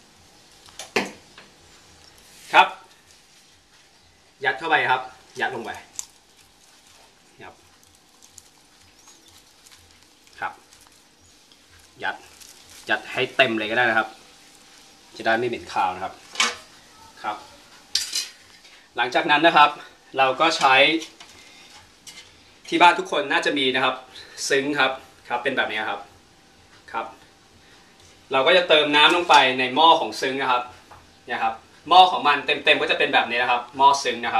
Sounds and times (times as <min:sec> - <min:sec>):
Cutlery, silverware: 0:18.0 - 0:18.4.